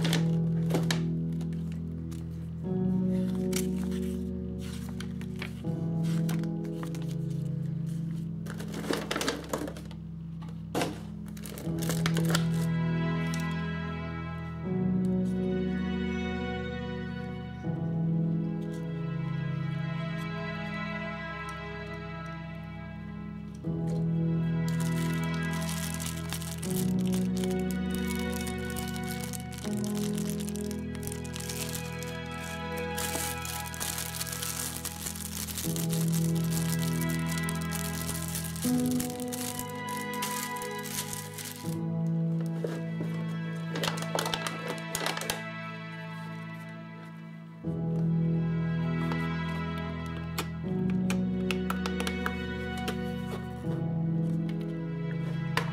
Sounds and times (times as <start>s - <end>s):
Music: 0.0s - 55.7s.